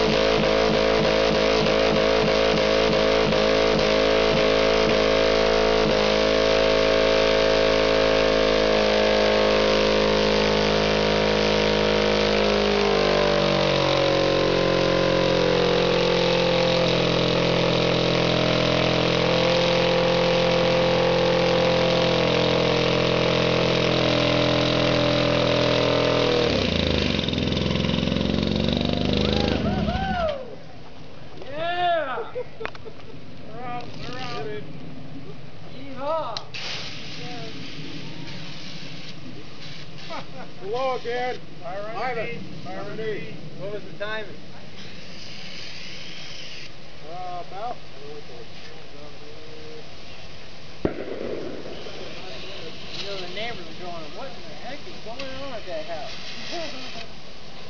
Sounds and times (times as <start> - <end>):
Medium engine (mid frequency): 0.0 - 57.7
Vehicle: 0.0 - 57.7.